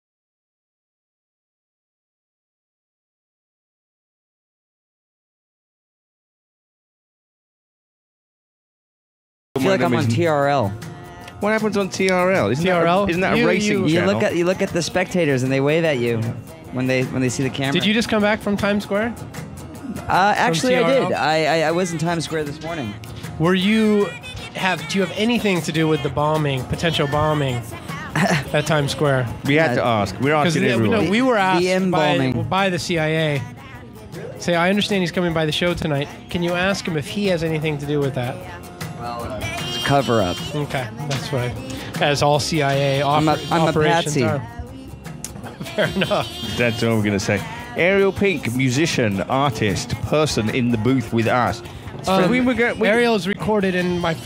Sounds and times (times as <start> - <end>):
Speech: 9.6 - 10.8, 11.4 - 19.1, 20.1 - 27.6, 28.5 - 33.4, 34.2 - 38.4, 39.0 - 44.4, 46.6 - 54.2
Music: 9.6 - 54.2.